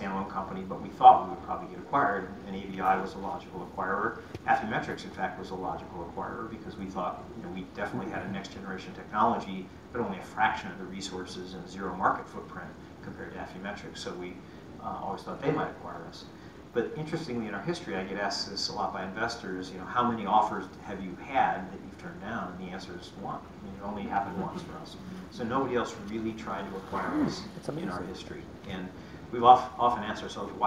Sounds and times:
Inside, small room: 0:00.0 - 0:30.6
Speech: 0:00.0 - 0:30.6.

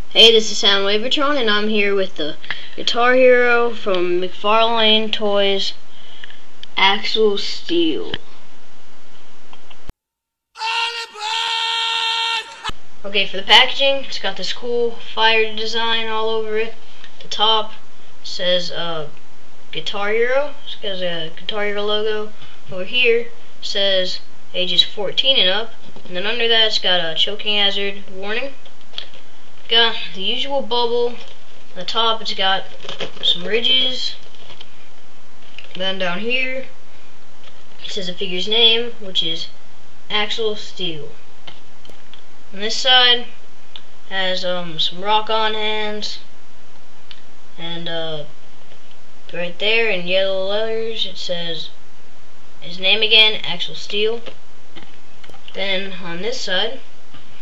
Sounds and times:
Speech: 0:00.1 - 0:05.8, 0:06.8 - 0:08.3, 0:10.6 - 0:11.7, 0:12.3 - 0:19.2, 0:19.8 - 0:28.6, 0:29.7 - 0:34.2, 0:35.7 - 0:36.8, 0:37.8 - 0:41.2, 0:42.6 - 0:43.4, 0:44.1 - 0:46.3, 0:47.6 - 0:48.3, 0:49.3 - 0:51.8, 0:52.6 - 0:54.4, 0:55.5 - 0:56.9.

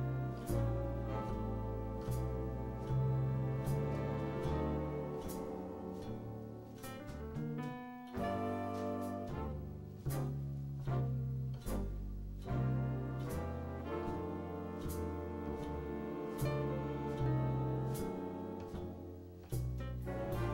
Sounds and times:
Music: 0:00.0 - 0:20.5.

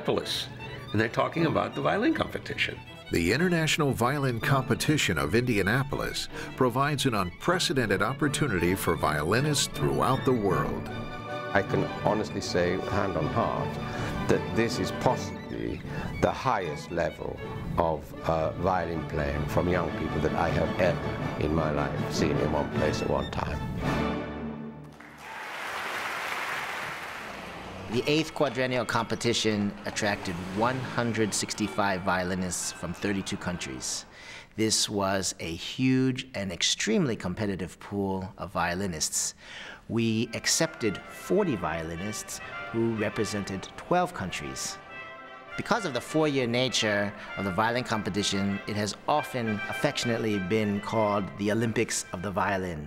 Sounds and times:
Speech: 0:00.0 - 0:10.8, 0:11.6 - 0:13.7, 0:14.3 - 0:23.6, 0:27.9 - 0:34.0, 0:34.6 - 0:44.8, 0:45.6 - 0:52.8
Violin, fiddle: 0:00.0 - 0:23.8, 0:27.9 - 0:34.1, 0:40.0 - 0:52.7.

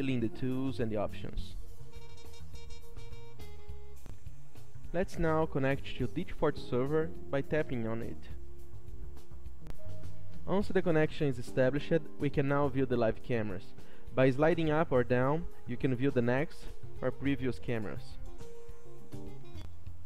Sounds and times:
Speech: 0:00.0 - 0:01.6, 0:04.9 - 0:08.4, 0:10.5 - 0:18.2
Music: 0:00.0 - 0:20.0.

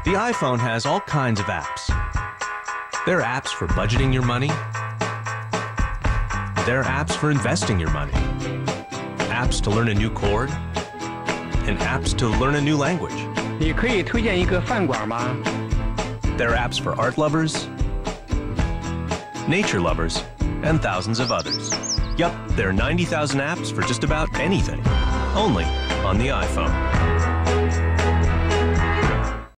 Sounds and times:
Speech: 0:00.0 - 0:02.0, 0:03.1 - 0:04.6, 0:06.6 - 0:08.2, 0:09.3 - 0:10.6, 0:11.7 - 0:15.4, 0:16.4 - 0:17.7, 0:19.5 - 0:21.6, 0:22.2 - 0:24.8, 0:25.4 - 0:26.8
Music: 0:00.0 - 0:29.5.

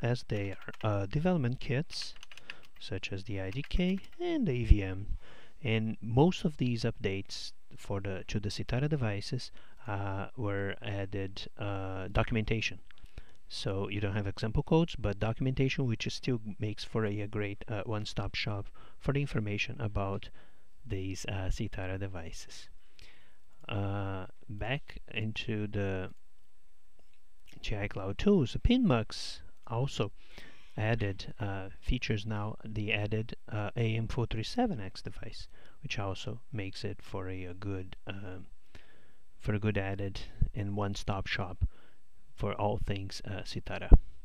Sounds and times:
Speech: 0:00.0 - 0:02.2, 0:02.8 - 0:12.9, 0:13.5 - 0:22.8, 0:23.6 - 0:26.2, 0:27.5 - 0:30.2, 0:30.8 - 0:38.5, 0:39.4 - 0:41.7, 0:42.4 - 0:44.0.

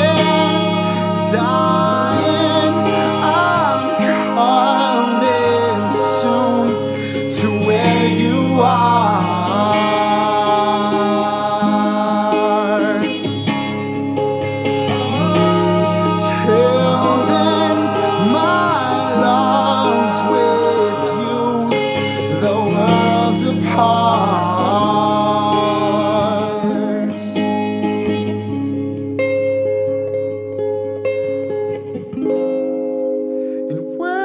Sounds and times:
Singing: 0:00.0 - 0:13.3, 0:14.9 - 0:27.4
Music: 0:00.0 - 0:34.2.

